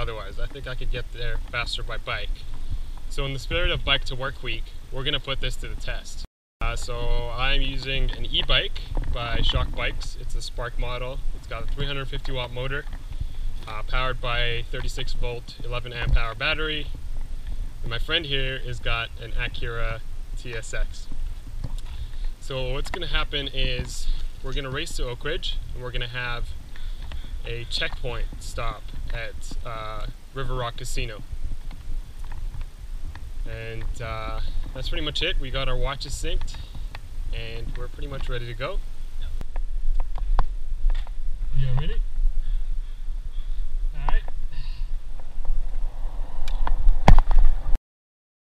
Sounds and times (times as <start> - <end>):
Speech: 0.0 - 2.4, 3.1 - 12.9, 13.7 - 16.9, 17.8 - 21.1, 22.4 - 26.5, 27.5 - 31.2, 33.5 - 36.6, 37.3 - 38.8, 41.6 - 42.0, 43.9 - 44.3.